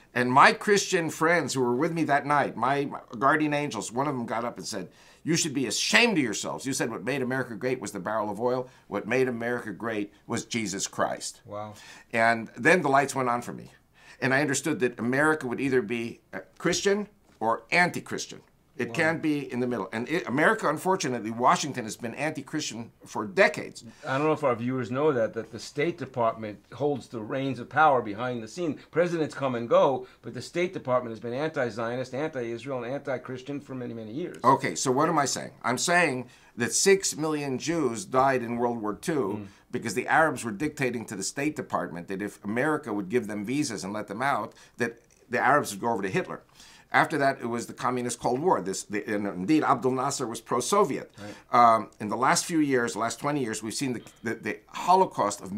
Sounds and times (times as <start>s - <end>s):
Speech: 0.1s - 55.5s.